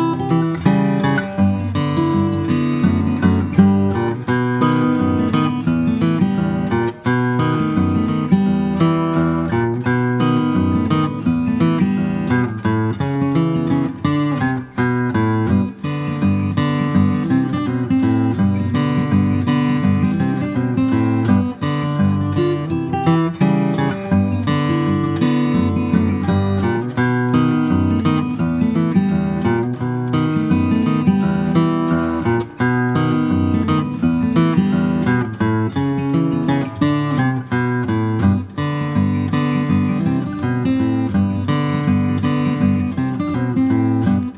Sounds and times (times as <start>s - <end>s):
Acoustic guitar: 0.0s - 44.3s.